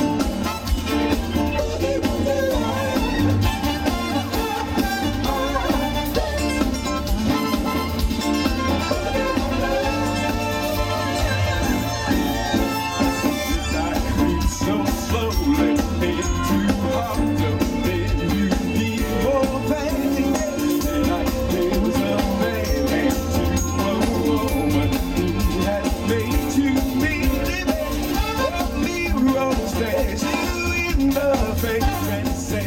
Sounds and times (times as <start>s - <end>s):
Music: 0.0s - 32.6s.